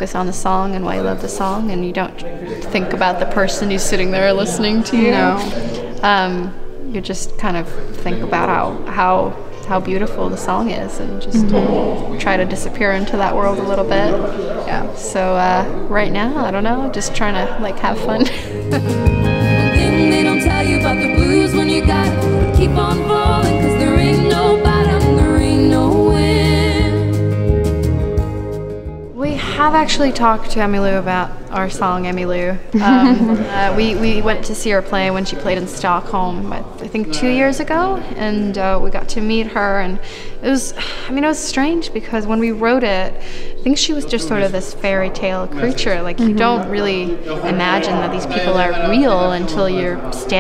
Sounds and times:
Speech: 0.0s - 18.3s, 29.2s - 43.1s, 43.7s - 50.4s
Music: 0.0s - 50.4s.

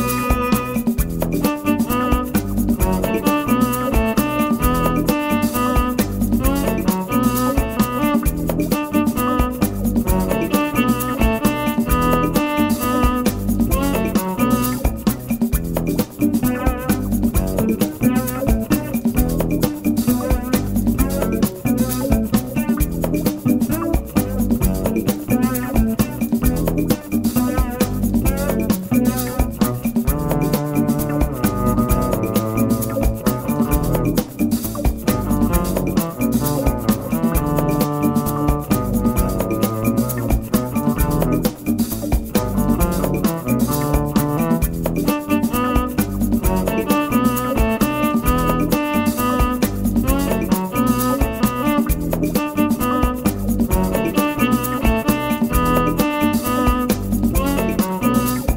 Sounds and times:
Music: 0.0s - 58.5s.

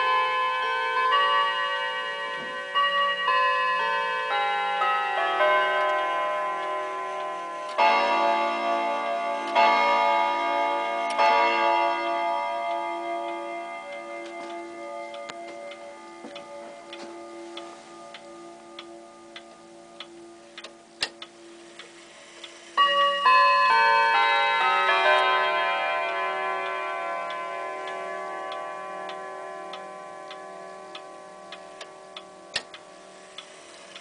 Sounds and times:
Tick-tock: 13.2s - 23.1s, 26.6s - 34.0s.

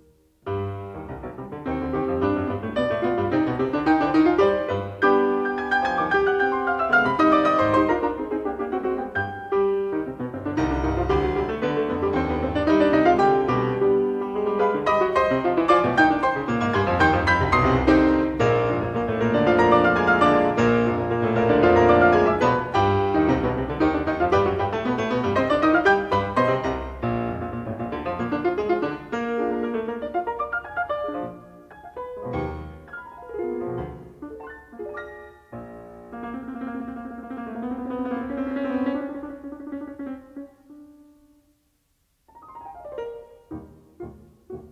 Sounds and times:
Piano: 0.0s - 44.7s.

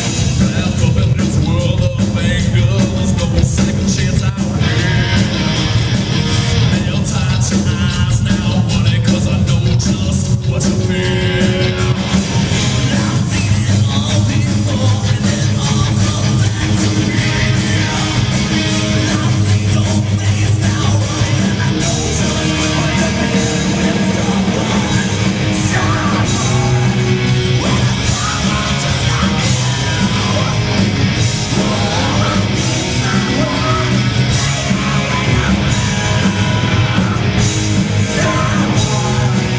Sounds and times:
Music: 0.0s - 39.5s.

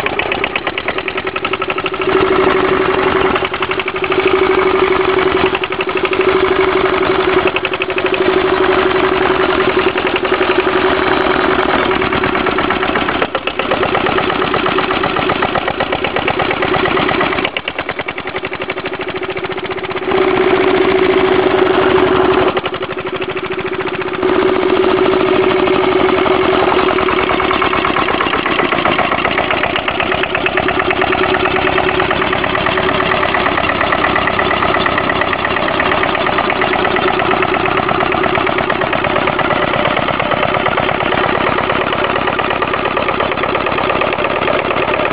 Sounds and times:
Engine: 0.0s - 45.1s.

